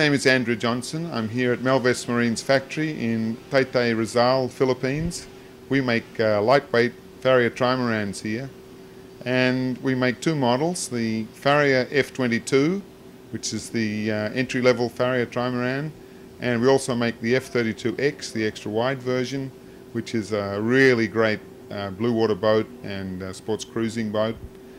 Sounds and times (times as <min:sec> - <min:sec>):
Speech: 0:00.0 - 0:08.6, 0:09.2 - 0:24.5.